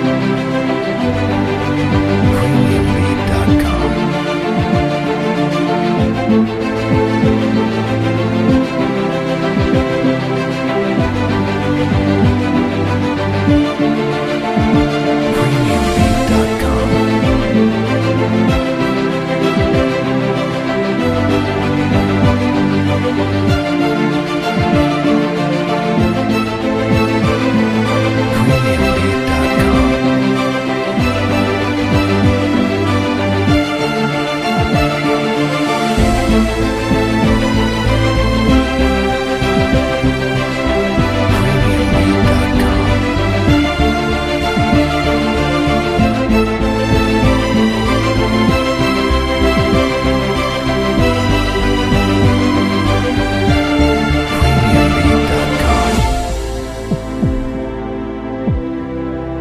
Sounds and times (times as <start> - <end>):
Music: 0.0 - 59.4
Speech: 2.3 - 4.2, 15.3 - 17.6, 28.3 - 30.2, 41.3 - 43.2, 54.3 - 56.2.